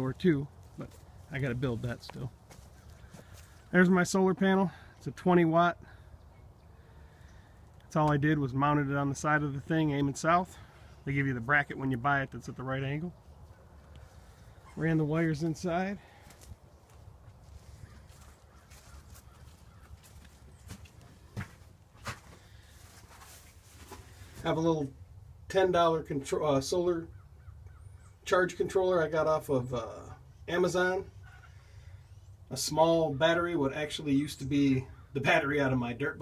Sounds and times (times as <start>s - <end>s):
Speech: 0.0s - 2.4s, 3.7s - 5.9s, 7.9s - 13.2s, 14.8s - 16.1s, 24.4s - 27.1s, 28.3s - 31.1s, 32.5s - 36.2s.